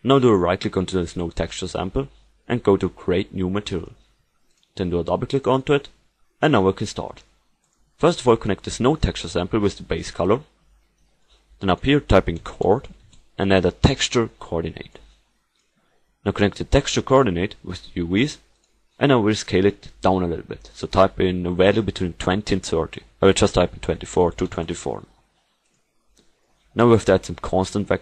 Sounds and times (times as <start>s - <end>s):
Speech: 0.0s - 4.0s, 4.8s - 7.3s, 8.0s - 10.5s, 11.6s - 15.1s, 16.2s - 25.2s, 26.7s - 28.0s.